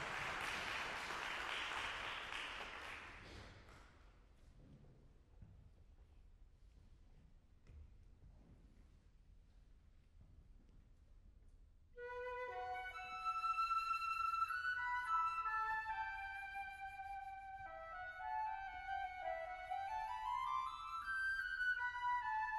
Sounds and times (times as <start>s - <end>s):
Flute: 12.0s - 22.5s.